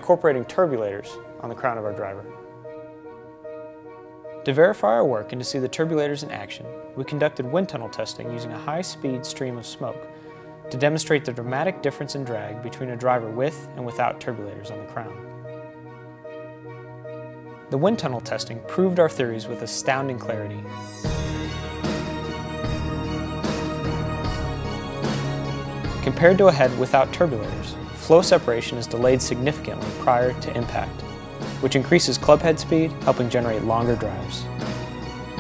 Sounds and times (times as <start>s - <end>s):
Speech: 0.0s - 2.3s, 4.5s - 10.0s, 10.7s - 15.2s, 17.7s - 20.6s, 26.0s - 31.0s, 31.6s - 34.5s
Music: 0.0s - 35.4s.